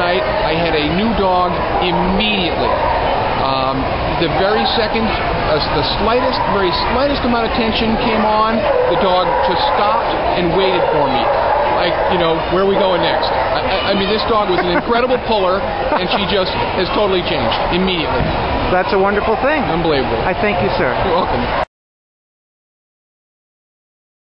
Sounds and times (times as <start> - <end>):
Speech: 0.0 - 2.7, 3.4 - 18.2.